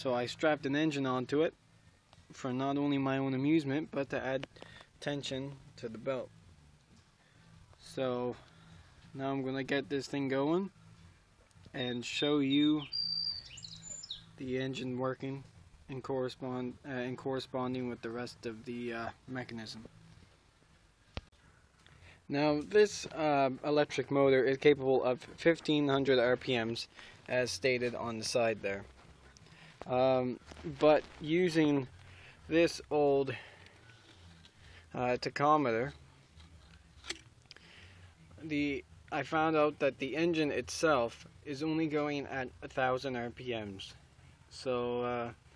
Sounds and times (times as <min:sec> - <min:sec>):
Speech: 0:00.0 - 0:01.6, 0:02.3 - 0:06.3, 0:07.8 - 0:08.4, 0:09.2 - 0:10.7, 0:11.7 - 0:12.9, 0:14.4 - 0:19.9, 0:22.3 - 0:28.9, 0:29.9 - 0:31.9, 0:32.5 - 0:33.4, 0:35.0 - 0:36.0, 0:38.4 - 0:45.4.